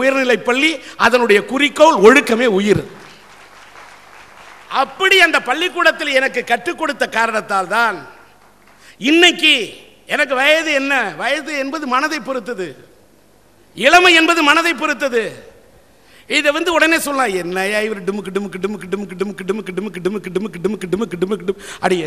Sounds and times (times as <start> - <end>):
Male speech, man speaking: 0.0 - 2.9, 4.7 - 8.2, 9.0 - 12.8, 13.8 - 15.5, 16.3 - 22.0
Narration, monologue: 0.0 - 22.0.